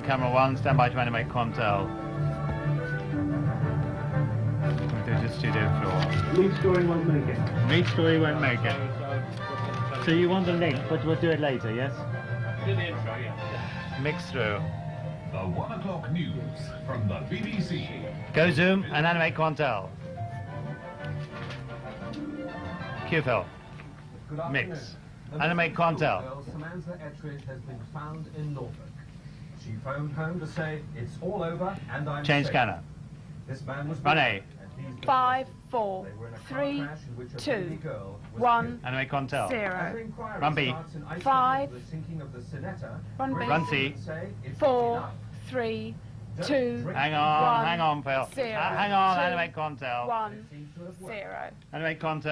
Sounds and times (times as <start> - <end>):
Music: 0.0 - 28.2, 34.6 - 44.8.